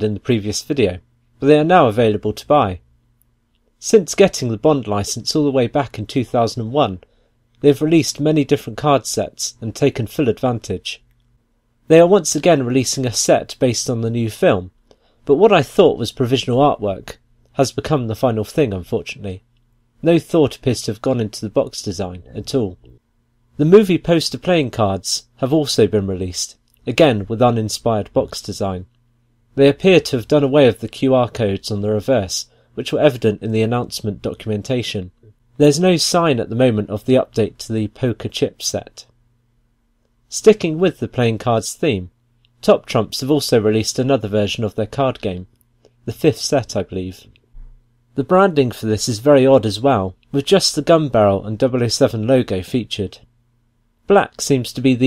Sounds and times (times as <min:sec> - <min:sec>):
Narration, monologue: 0:00.0 - 0:55.0.